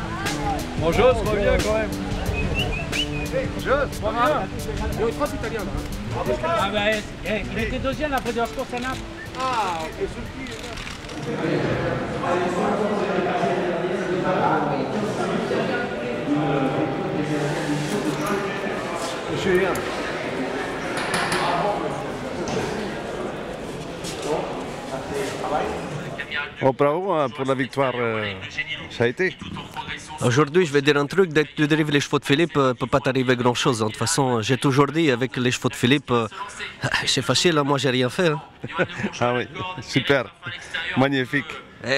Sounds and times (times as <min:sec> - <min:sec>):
Music: 0:00.0 - 0:11.3
Speech: 0:00.1 - 0:02.0, 0:24.2 - 0:41.9.